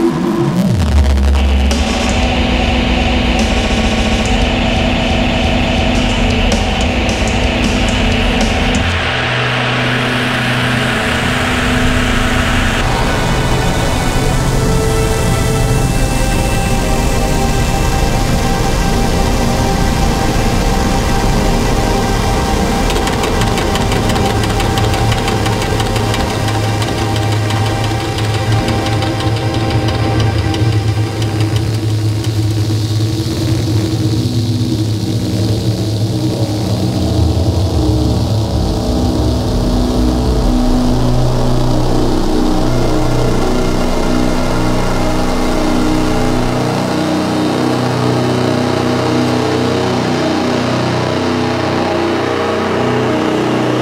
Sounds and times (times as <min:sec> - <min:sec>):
Music: 0:00.0 - 0:53.8.